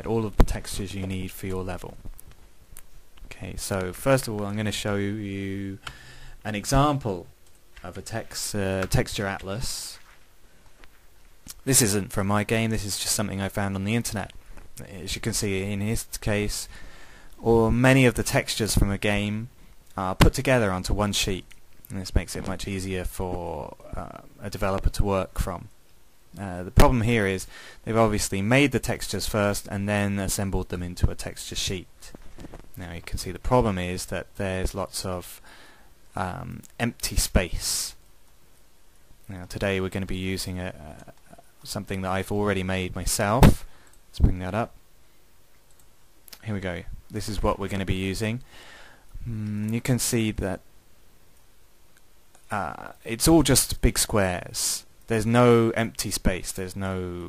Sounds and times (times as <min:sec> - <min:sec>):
Speech: 0:00.0 - 0:02.1, 0:03.3 - 0:10.1, 0:11.5 - 0:16.7, 0:17.4 - 0:32.2, 0:32.8 - 0:35.4, 0:36.1 - 0:38.0, 0:39.3 - 0:44.8, 0:46.4 - 0:48.5, 0:49.2 - 0:50.7, 0:52.4 - 0:57.2.